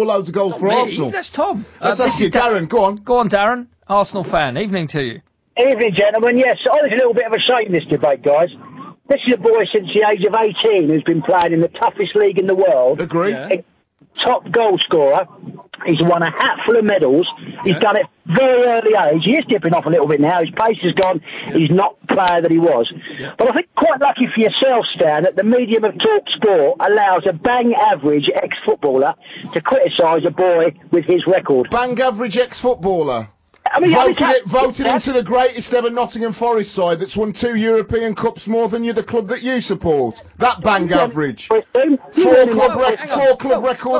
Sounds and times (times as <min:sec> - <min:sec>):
Speech: 0:00.0 - 0:13.6, 0:14.2 - 0:43.9.